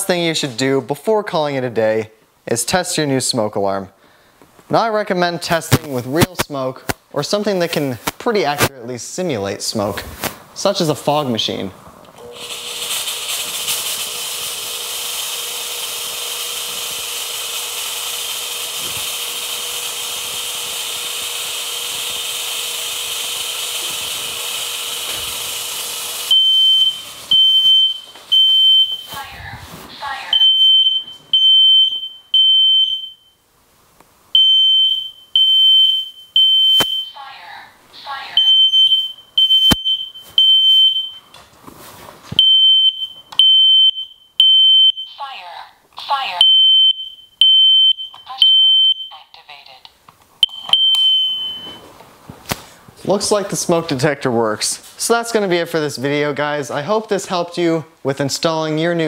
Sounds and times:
Speech: 0.0s - 4.0s, 4.7s - 11.8s, 29.1s - 30.4s, 45.2s - 46.4s, 53.0s - 59.0s
Smoke detector, smoke alarm: 26.3s - 29.1s, 30.3s - 33.4s, 34.4s - 37.2s, 38.4s - 41.3s, 42.4s - 45.2s, 46.4s - 49.3s, 50.4s - 51.9s.

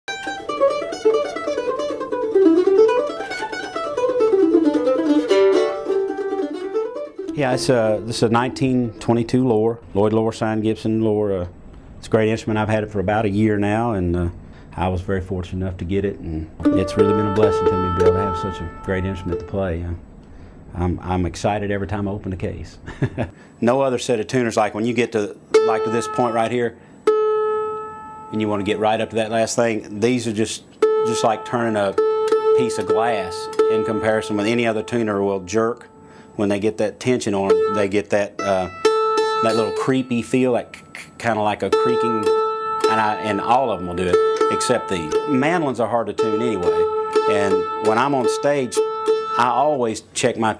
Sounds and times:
Guitar: 0.1s - 23.4s, 24.0s - 50.5s
Speech: 7.3s - 20.0s, 20.7s - 22.8s, 23.6s - 26.8s, 28.3s - 32.0s, 32.6s - 38.8s, 39.4s - 42.3s, 42.9s - 46.7s, 47.3s - 48.8s, 49.4s - 50.5s.

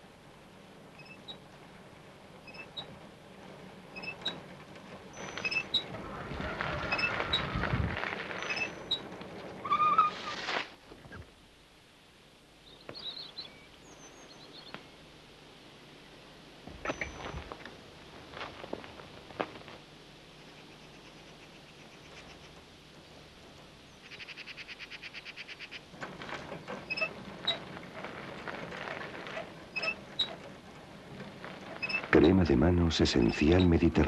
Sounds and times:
Bicycle: 0.0s - 11.3s, 16.0s - 34.0s
Speech: 32.1s - 34.0s.

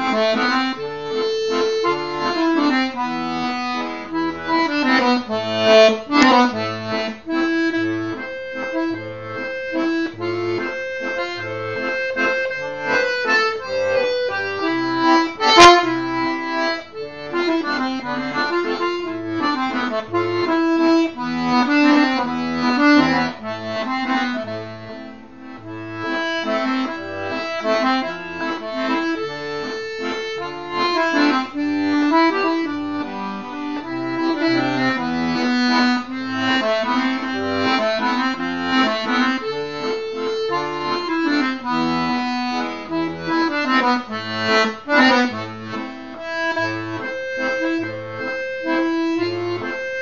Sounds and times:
Music: 0.0s - 50.0s.

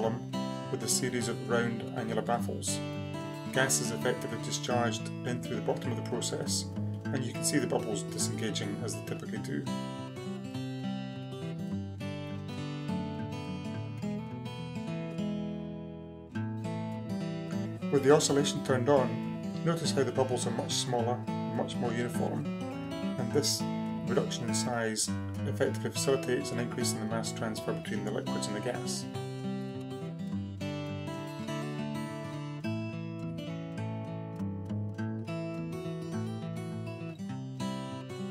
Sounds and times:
Speech: 0.0s - 2.8s, 3.5s - 9.8s, 17.9s - 22.5s, 23.2s - 29.1s
Music: 0.0s - 38.3s.

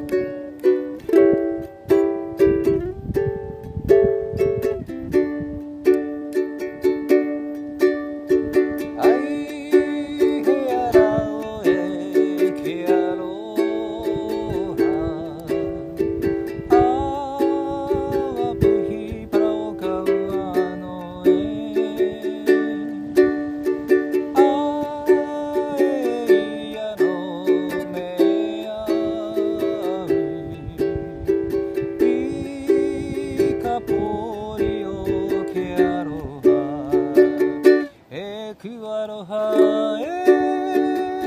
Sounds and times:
Ukulele: 0.0s - 41.2s.

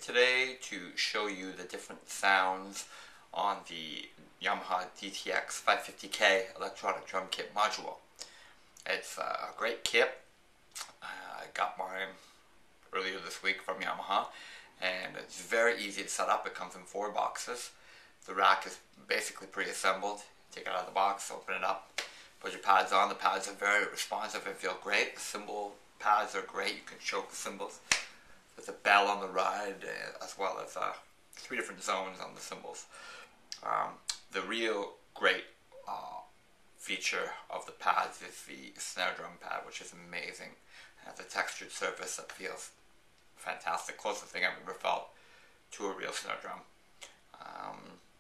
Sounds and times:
Speech: 0.0s - 12.3s, 12.9s - 28.0s, 28.6s - 42.8s, 43.4s - 48.1s.

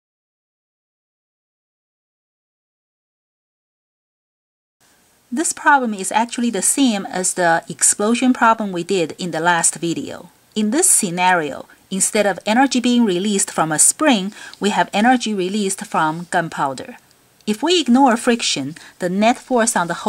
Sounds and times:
Speech: 5.4s - 20.0s.

